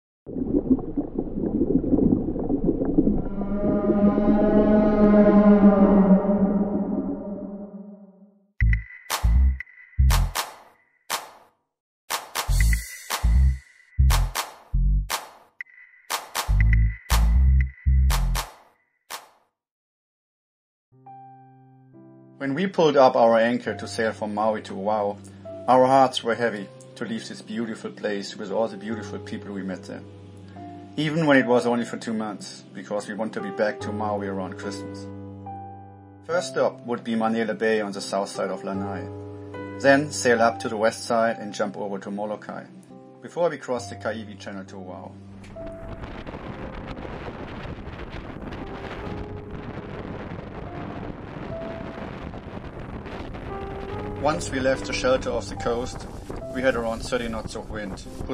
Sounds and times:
Whale vocalization: 3.0s - 8.3s
Music: 8.0s - 10.5s, 12.1s - 15.2s, 16.1s - 18.5s, 20.9s - 47.2s, 48.1s - 58.3s.

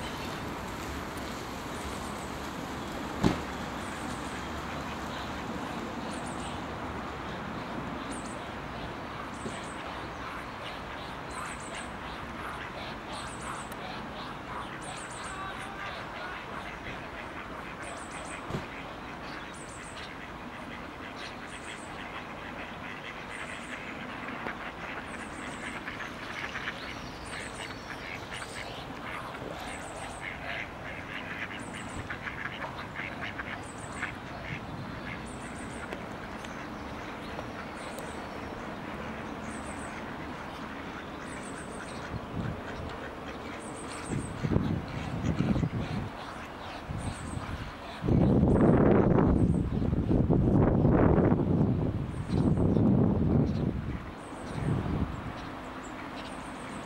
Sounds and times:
Quack: 9.4s - 36.0s, 39.8s - 48.2s.

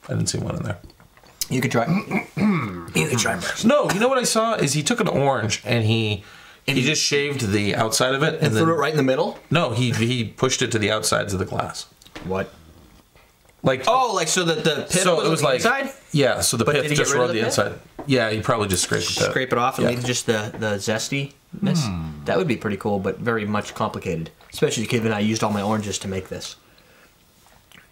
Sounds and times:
Speech: 0.0s - 2.1s, 2.8s - 12.5s, 13.6s - 26.6s
Inside, small room: 0.0s - 27.9s.

